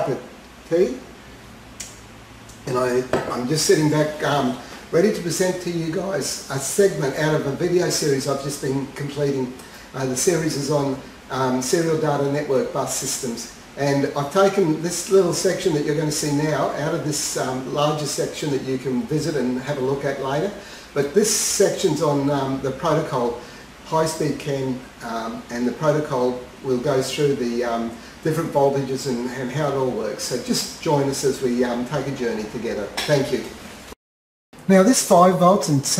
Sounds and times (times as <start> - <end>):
Speech: 0.0 - 1.1, 2.5 - 33.6, 34.6 - 36.0.